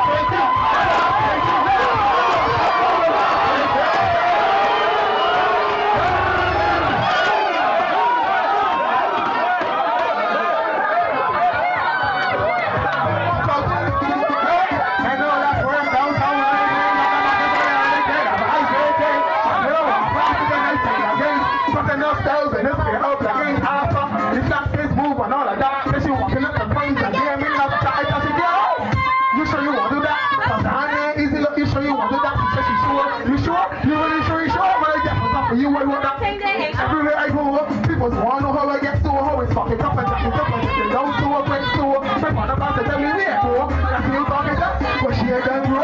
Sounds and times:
Music: 0.0s - 8.6s, 11.1s - 45.8s
Chatter: 0.0s - 45.8s
Crowd: 0.0s - 45.8s
Speech: 12.7s - 45.8s.

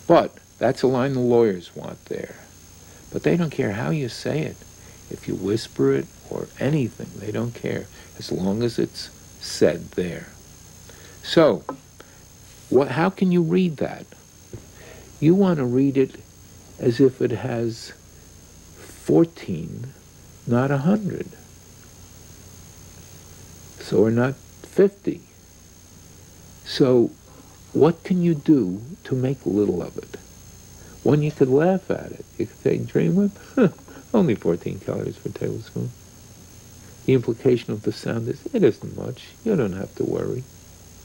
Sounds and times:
Speech: 0.1s - 2.5s, 3.1s - 10.4s, 11.2s - 11.8s, 12.7s - 14.2s, 15.2s - 16.2s, 16.8s - 18.0s, 18.8s - 21.4s, 23.8s - 25.3s, 26.6s - 27.2s, 27.8s - 30.2s, 31.0s - 36.0s, 37.1s - 40.5s.

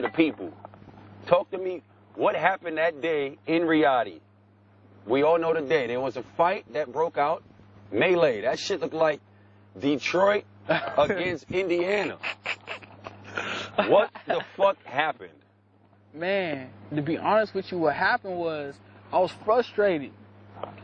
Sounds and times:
Speech: 11.0s - 12.2s, 16.2s - 20.2s.

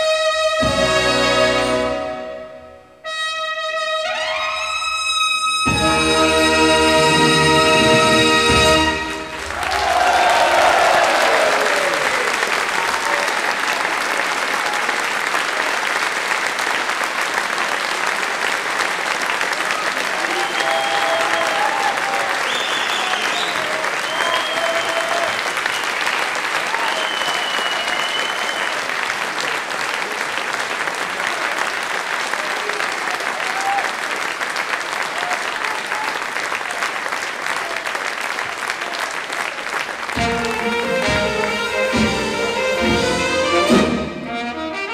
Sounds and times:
Applause: 9.2s - 42.4s.

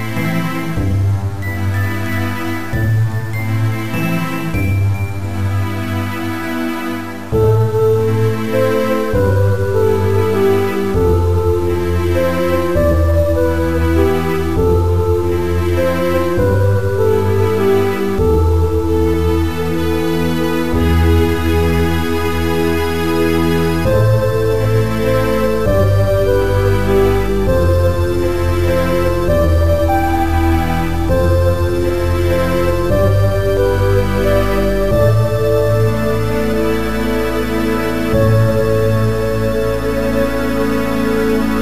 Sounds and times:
Soundtrack music: 0.0s - 41.6s.

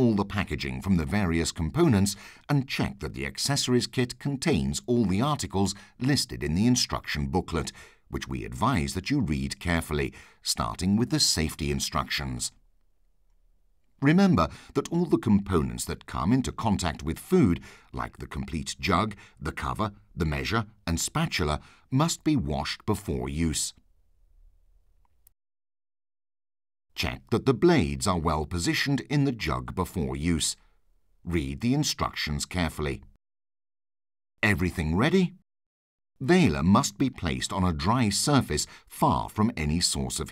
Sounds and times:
Speech: 0.0s - 12.6s, 14.0s - 23.8s, 27.0s - 33.2s, 34.4s - 35.4s, 36.2s - 40.3s.

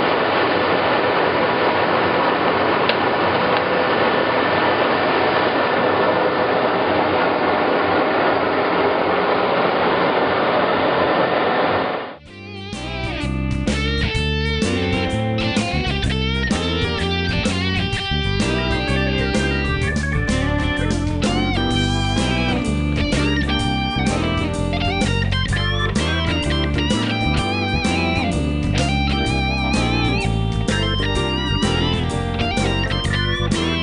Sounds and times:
Steel guitar, slide guitar: 12.3s - 33.8s.

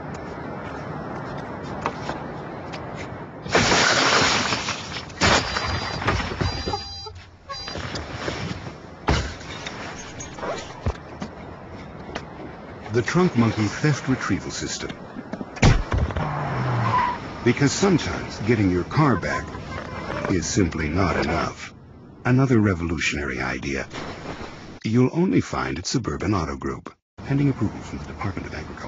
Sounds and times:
Speech: 12.9s - 15.0s, 17.4s - 19.5s, 20.1s - 21.7s, 22.3s - 23.9s, 24.8s - 28.8s.

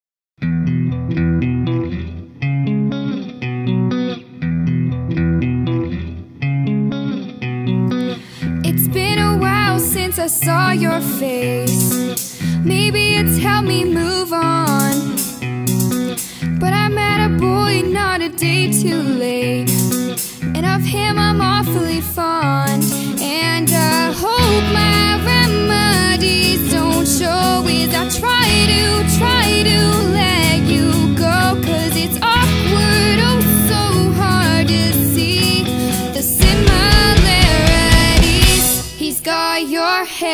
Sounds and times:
Music: 0.4s - 40.3s.

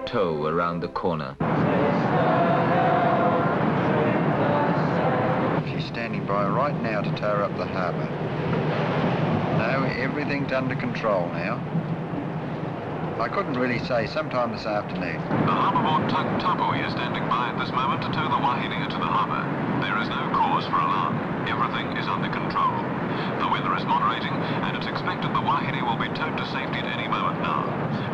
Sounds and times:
Speech: 0.0s - 1.4s, 5.6s - 8.1s, 9.6s - 11.6s, 13.2s - 28.1s
Outside, rural or natural: 0.0s - 28.1s.

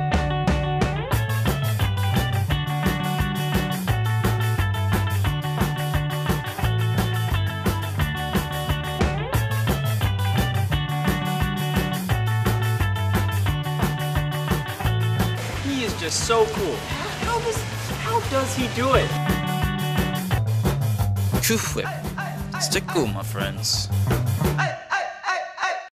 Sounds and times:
Music: 0.0s - 24.9s
Speech: 15.6s - 19.2s, 21.4s - 23.9s.

